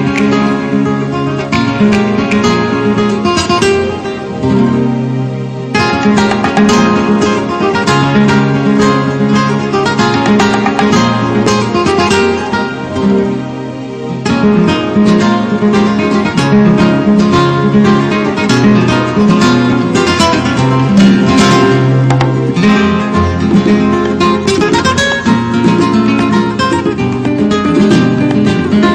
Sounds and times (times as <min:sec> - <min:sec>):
Flamenco: 0:00.0 - 0:28.9.